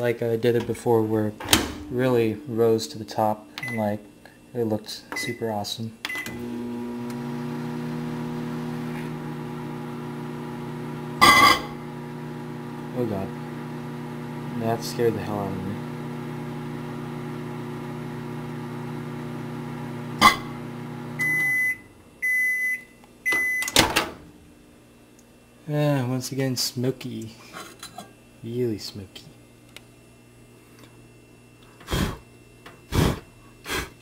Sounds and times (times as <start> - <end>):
Speech: 0.0 - 6.0, 12.9 - 13.4, 14.5 - 15.8, 25.6 - 27.4, 28.4 - 29.4
Microwave oven: 0.0 - 26.1, 27.2 - 34.0
Beep, bleep: 21.2 - 23.8.